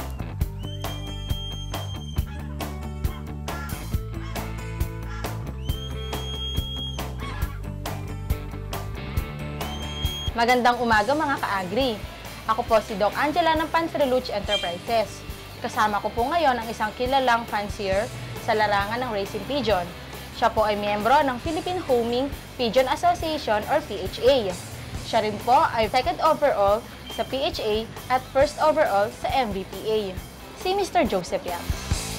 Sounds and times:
Music: 0.0 - 32.1
Speech: 10.4 - 31.7.

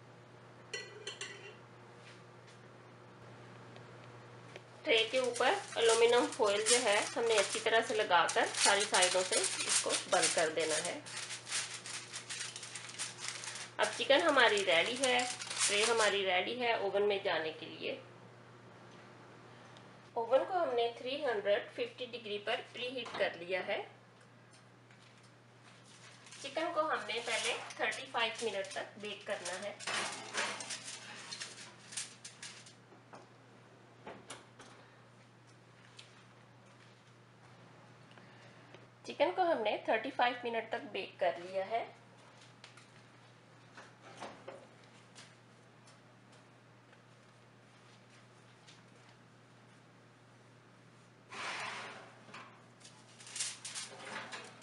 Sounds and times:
Speech: 4.8 - 11.1, 13.8 - 18.1, 20.2 - 24.0, 26.4 - 29.8, 39.1 - 42.0.

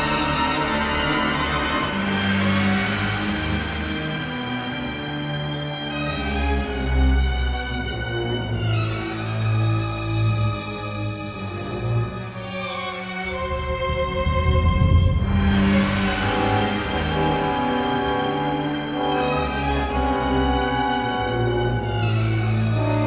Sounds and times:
Music: 0.0 - 23.0.

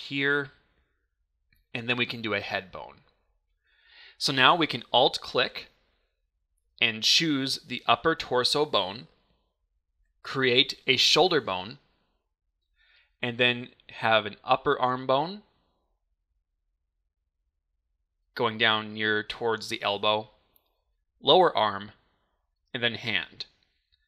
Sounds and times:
Speech: 0.0 - 0.6, 1.7 - 3.1, 4.2 - 5.7, 6.8 - 9.2, 10.2 - 11.8, 13.2 - 15.5, 18.4 - 20.4, 21.2 - 22.0, 22.8 - 23.6.

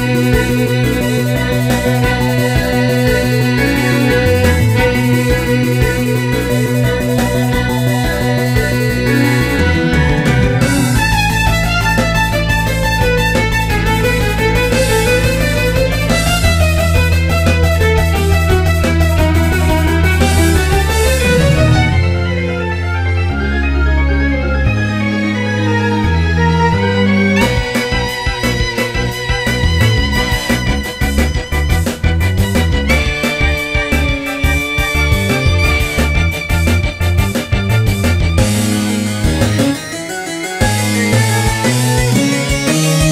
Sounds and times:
Violin, fiddle: 0.0 - 38.0.

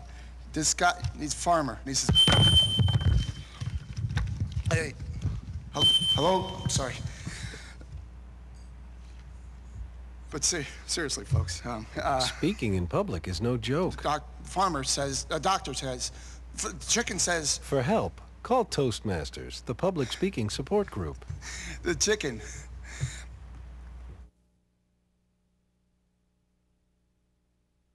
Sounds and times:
Narration, monologue: 0.0 - 24.2
Male speech, man speaking: 0.5 - 2.2, 4.7 - 5.0, 5.8 - 7.0, 10.3 - 21.2, 21.8 - 22.5.

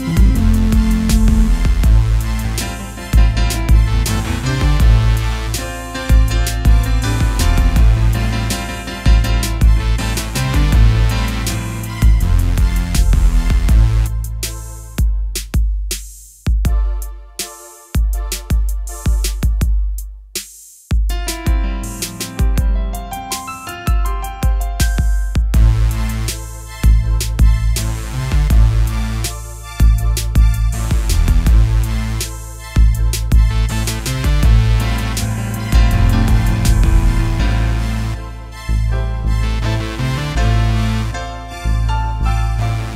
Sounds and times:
Music: 0.0 - 42.9.

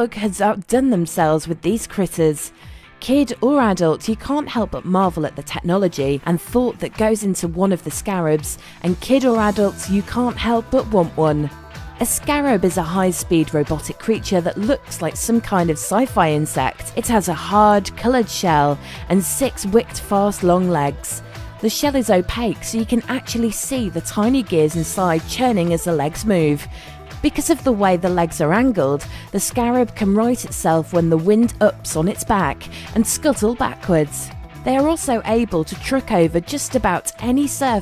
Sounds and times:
Music: 0.0 - 37.8
Speech: 0.0 - 37.8.

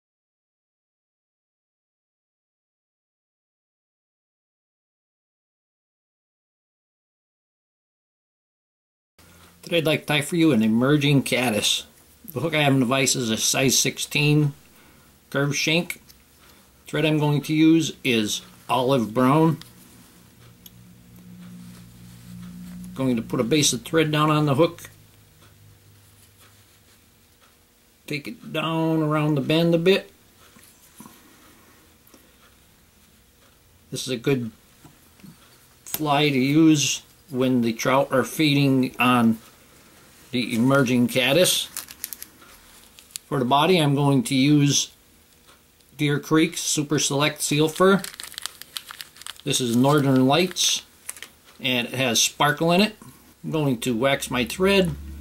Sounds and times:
Speech: 9.7 - 14.6, 15.3 - 16.0, 16.9 - 19.6, 23.0 - 25.0, 28.1 - 30.1, 33.9 - 34.6, 35.9 - 39.4, 40.3 - 41.8, 43.3 - 45.0, 46.0 - 48.1, 49.4 - 50.9, 51.6 - 55.1.

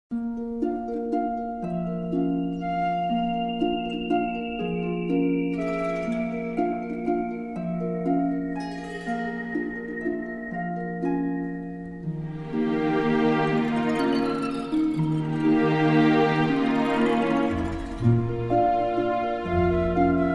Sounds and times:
Music: 0.1 - 20.3.

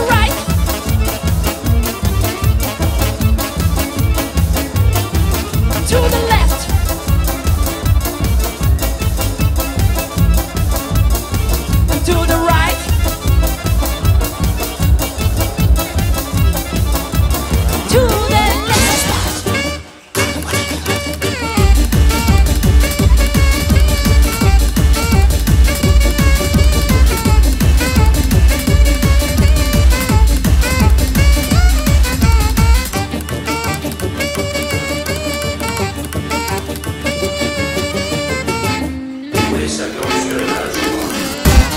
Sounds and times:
Music: 0.0 - 41.7.

